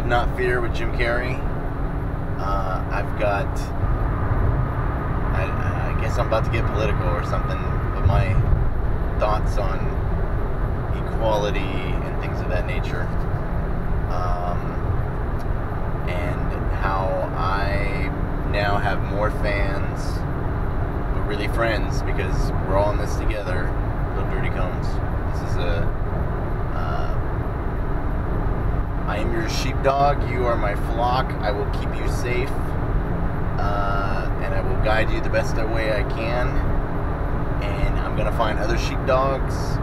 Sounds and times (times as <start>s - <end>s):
Speech: 0.0s - 1.5s, 2.4s - 3.7s, 5.4s - 8.5s, 9.2s - 10.0s, 11.0s - 13.2s, 14.1s - 14.8s, 16.1s - 20.2s, 21.2s - 25.9s, 26.8s - 27.2s, 29.1s - 32.7s, 33.6s - 36.7s, 37.6s - 39.8s.